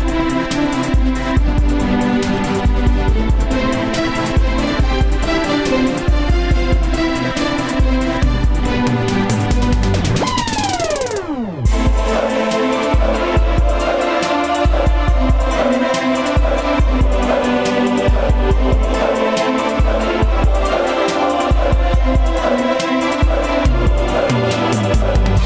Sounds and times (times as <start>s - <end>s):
Pop music: 0.0s - 25.4s.